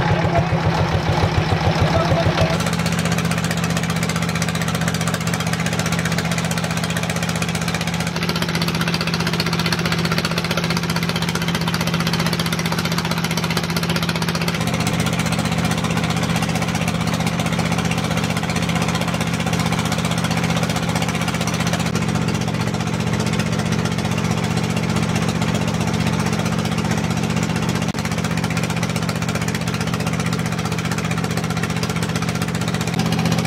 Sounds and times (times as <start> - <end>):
Motorboat, speedboat: 0.0 - 33.4.